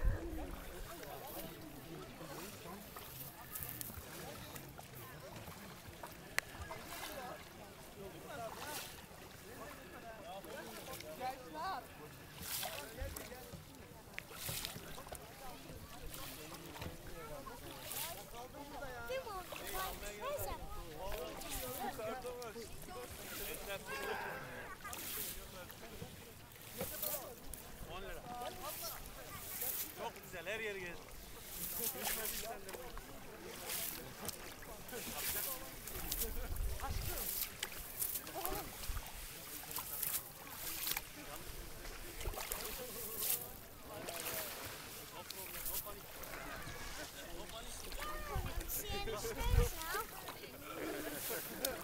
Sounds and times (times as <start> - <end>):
Speech: 0.0 - 51.8.